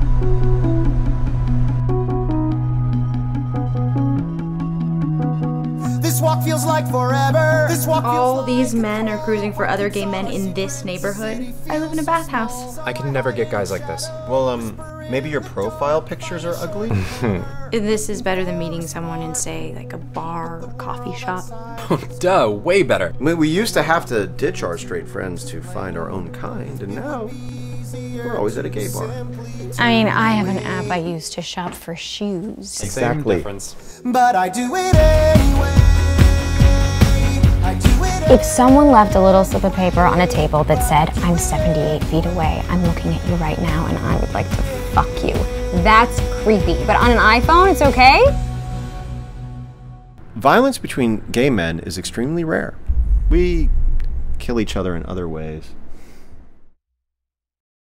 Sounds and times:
Music: 0:00.0 - 0:50.2
Speech: 0:07.7 - 0:27.3, 0:28.2 - 0:33.8, 0:38.3 - 0:48.3, 0:50.4 - 0:53.7, 0:54.4 - 0:55.7.

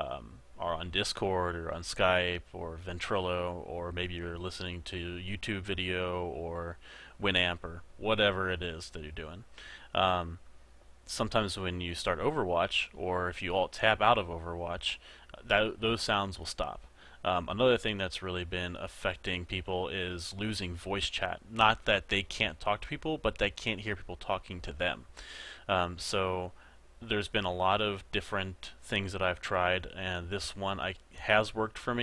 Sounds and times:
Speech: 0:00.0 - 0:10.4, 0:11.1 - 0:25.1, 0:25.7 - 0:32.0.

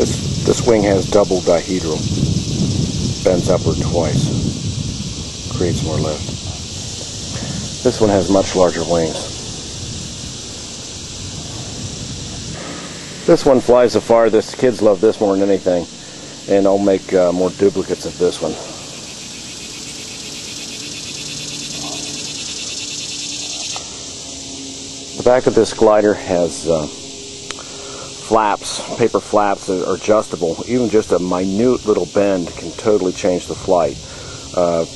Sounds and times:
Speech: 0:00.0 - 0:02.0, 0:03.3 - 0:04.4, 0:05.5 - 0:06.3, 0:07.8 - 0:09.4, 0:13.3 - 0:15.9, 0:16.5 - 0:18.8, 0:25.2 - 0:27.0, 0:28.2 - 0:34.0, 0:34.6 - 0:34.9.

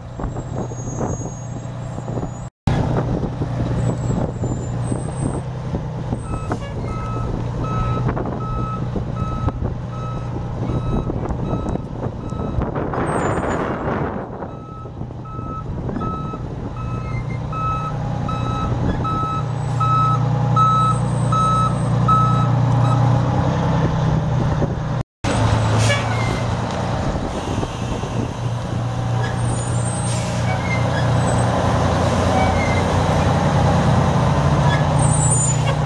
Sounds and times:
Reversing beeps: 0:06.3 - 0:12.6, 0:14.6 - 0:23.0.

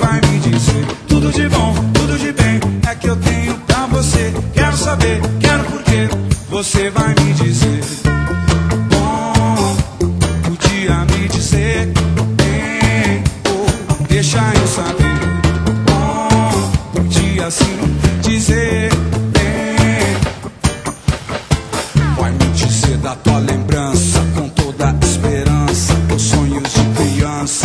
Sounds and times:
Music: 0:00.0 - 0:27.6.

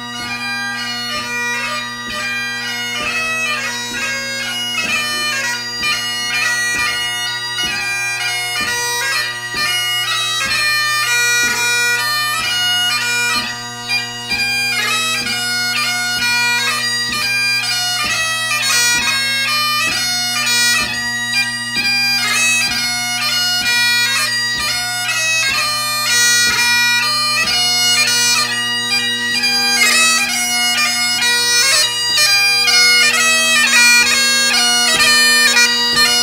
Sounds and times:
Bagpipes: 0:00.0 - 0:36.2.

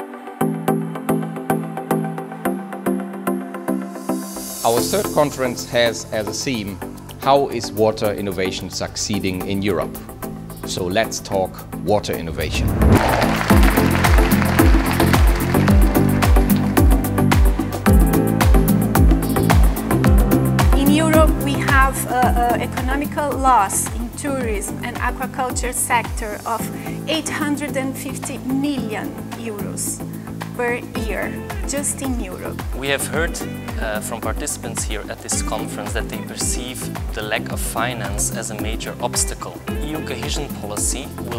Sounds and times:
Music: 0:00.0 - 0:41.3
Speech: 0:04.6 - 0:10.0, 0:10.7 - 0:12.7, 0:20.8 - 0:30.0, 0:30.6 - 0:41.3.

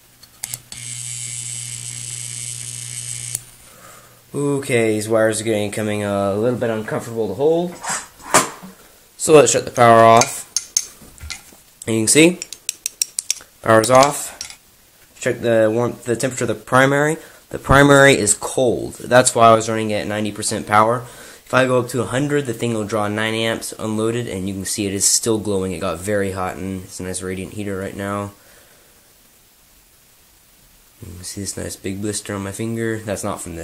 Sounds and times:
Cutlery, silverware: 0:10.2 - 0:11.5, 0:12.4 - 0:14.6.

